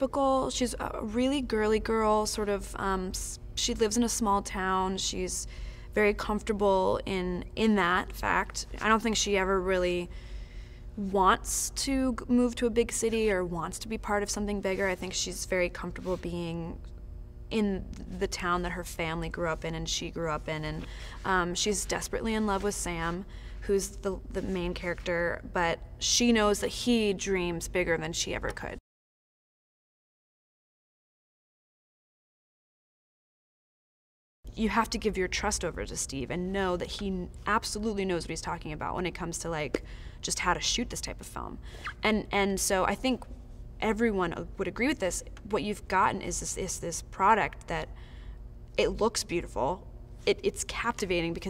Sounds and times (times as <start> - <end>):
Speech: 0.0 - 10.1, 11.0 - 16.8, 17.5 - 28.8, 34.5 - 47.9, 48.8 - 51.4.